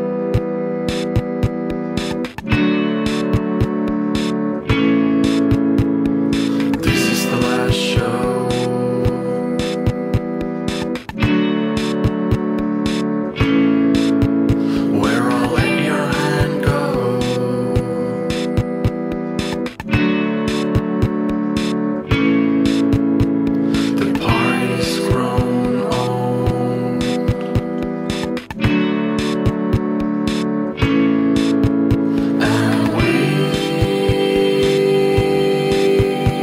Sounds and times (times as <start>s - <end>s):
Music: 0.0s - 36.4s.